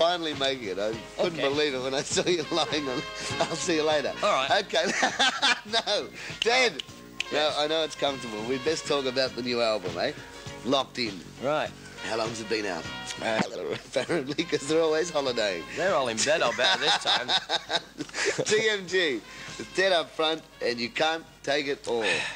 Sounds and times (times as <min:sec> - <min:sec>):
Speech: 0:00.0 - 0:04.9, 0:05.7 - 0:17.4, 0:18.4 - 0:22.2.